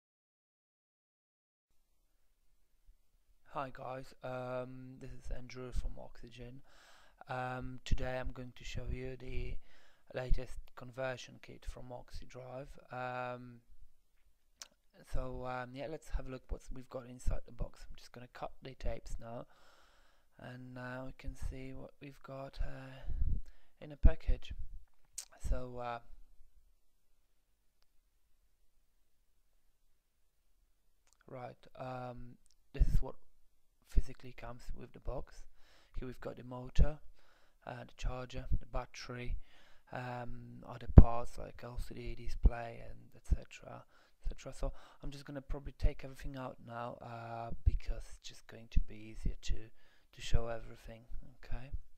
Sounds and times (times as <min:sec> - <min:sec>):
Speech: 0:03.5 - 0:06.6, 0:07.2 - 0:13.6, 0:15.0 - 0:19.5, 0:20.4 - 0:23.2, 0:23.8 - 0:24.6, 0:25.2 - 0:26.2, 0:31.1 - 0:33.2, 0:33.8 - 0:37.0, 0:37.6 - 0:51.8.